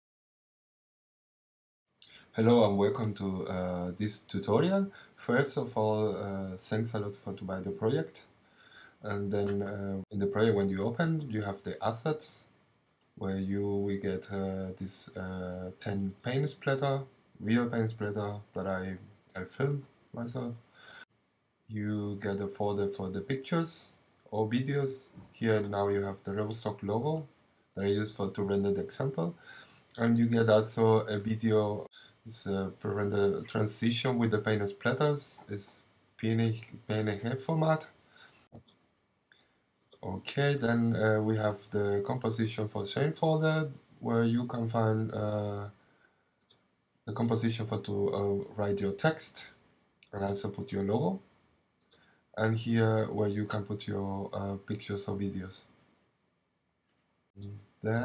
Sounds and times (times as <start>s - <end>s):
Speech: 2.1s - 8.3s, 9.0s - 12.5s, 13.2s - 20.6s, 21.7s - 29.4s, 30.0s - 37.9s, 40.0s - 45.8s, 47.1s - 51.2s, 52.4s - 55.7s, 57.4s - 58.0s.